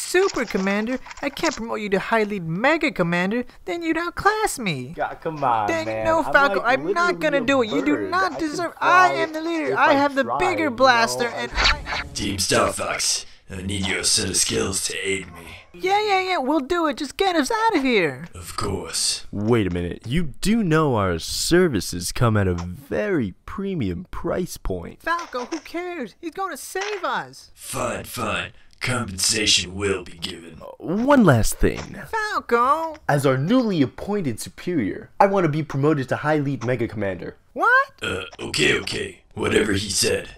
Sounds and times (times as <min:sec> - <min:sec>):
Speech: 0:04.8 - 0:16.7, 0:17.4 - 0:40.3.